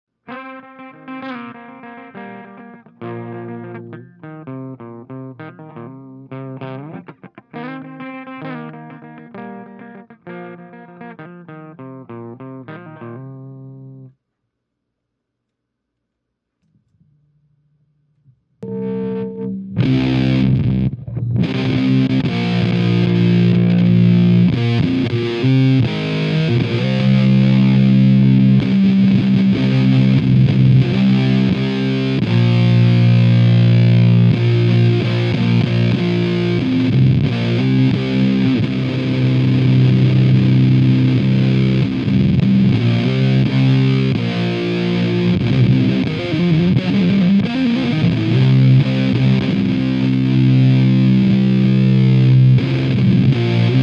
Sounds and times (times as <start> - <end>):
Distortion: 0.1 - 53.8
Music: 0.2 - 14.2, 18.6 - 53.8.